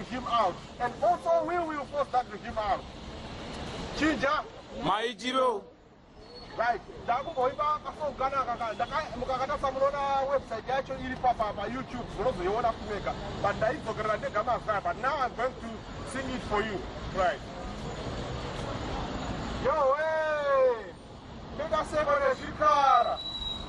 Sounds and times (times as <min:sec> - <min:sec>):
Male speech, man speaking: 0:00.0 - 0:02.8, 0:04.0 - 0:05.7, 0:06.5 - 0:17.5, 0:19.6 - 0:21.0, 0:21.6 - 0:23.2
Narration, monologue: 0:00.0 - 0:05.9, 0:06.5 - 0:17.7.